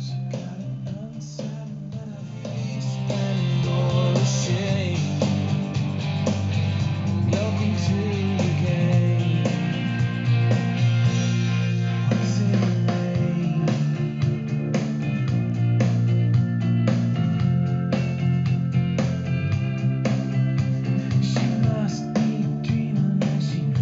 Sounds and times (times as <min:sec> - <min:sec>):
Music: 0:00.0 - 0:23.8.